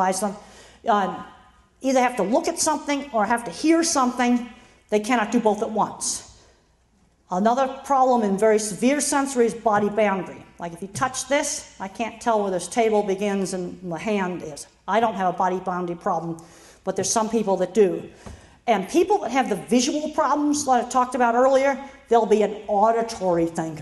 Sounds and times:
Female speech, woman speaking: 0.0s - 1.2s, 1.8s - 4.4s, 5.0s - 6.2s, 7.3s - 18.0s, 18.7s - 23.8s
Narration, monologue: 0.0s - 23.8s.

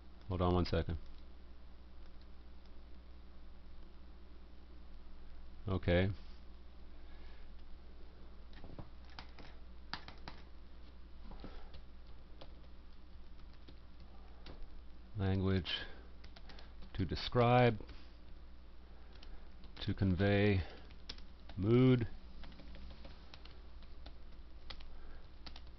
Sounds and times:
Speech: 0.3s - 1.0s, 5.6s - 6.2s, 15.2s - 16.0s, 16.9s - 17.8s, 19.8s - 20.8s, 21.6s - 22.2s.

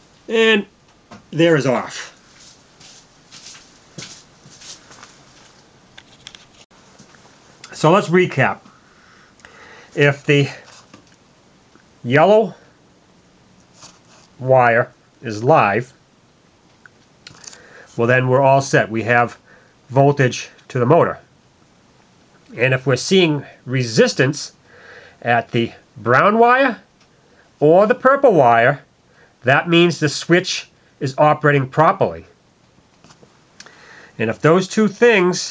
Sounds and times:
Inside, small room: 0.0s - 35.5s
Speech: 0.3s - 0.7s, 1.3s - 2.2s, 7.7s - 8.7s, 10.0s - 10.7s, 12.0s - 12.6s, 14.4s - 16.0s, 18.0s - 21.3s, 22.5s - 24.6s, 25.2s - 26.9s, 27.6s - 32.3s, 34.2s - 35.5s.

